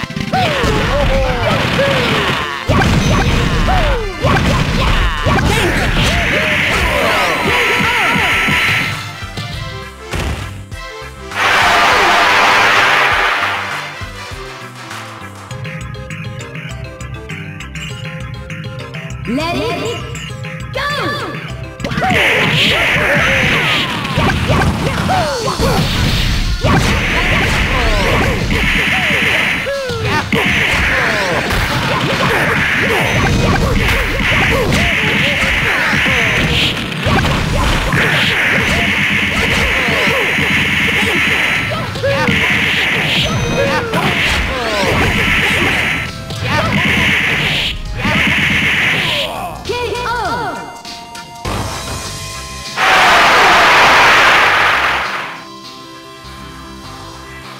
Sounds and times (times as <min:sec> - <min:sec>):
Music: 0:00.0 - 0:57.5
Speech: 0:19.3 - 0:20.0, 0:20.8 - 0:21.4, 0:43.2 - 0:45.0, 0:46.4 - 0:47.0, 0:49.1 - 0:50.7.